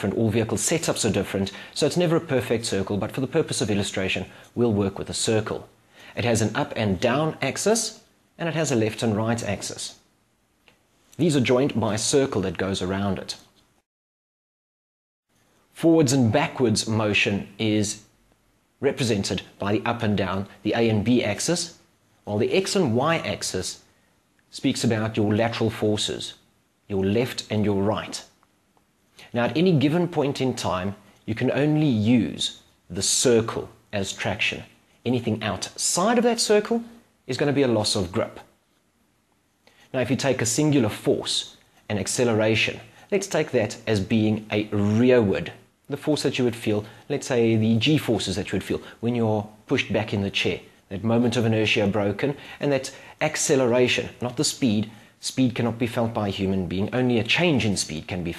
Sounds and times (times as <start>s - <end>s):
Male speech, man speaking: 0.0s - 10.0s, 11.2s - 13.5s, 15.8s - 18.1s, 18.8s - 23.9s, 24.5s - 28.4s, 29.3s - 38.6s, 39.9s - 58.3s.